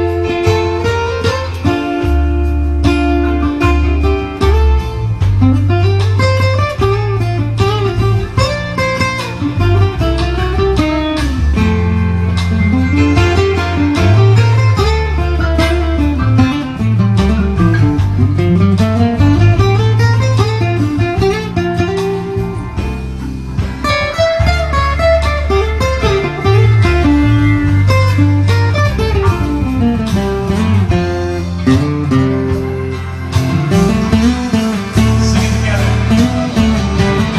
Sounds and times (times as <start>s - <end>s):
Guitar: 0.0s - 37.3s.